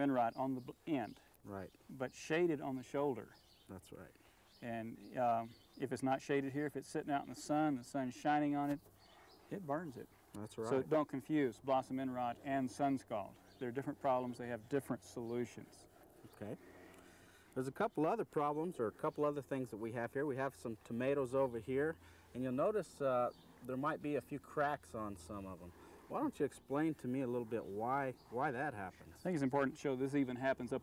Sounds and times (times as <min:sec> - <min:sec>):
Speech: 0:00.0 - 0:08.8, 0:09.5 - 0:16.6, 0:17.6 - 0:30.8.